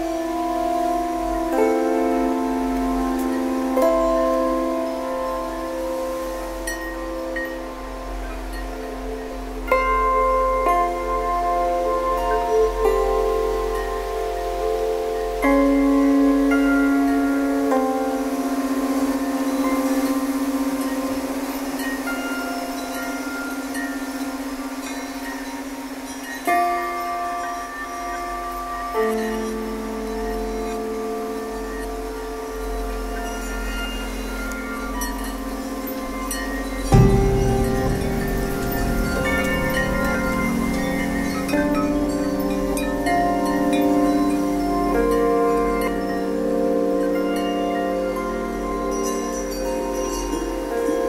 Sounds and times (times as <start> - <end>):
Music: 0.0 - 51.0
Rustling leaves: 0.0 - 51.0.